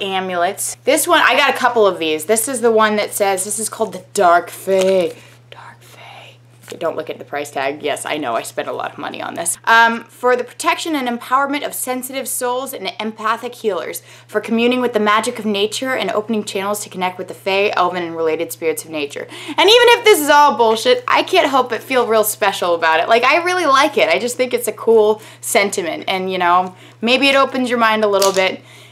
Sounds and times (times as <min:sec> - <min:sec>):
Whispering: 0:05.5 - 0:06.4.